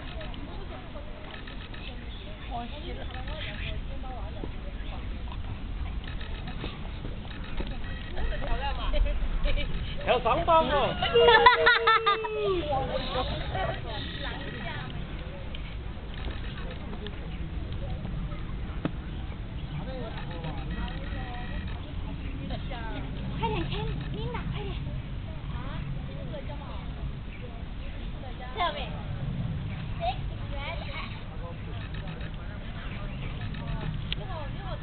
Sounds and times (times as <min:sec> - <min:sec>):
Children playing: 0:10.7 - 0:34.8.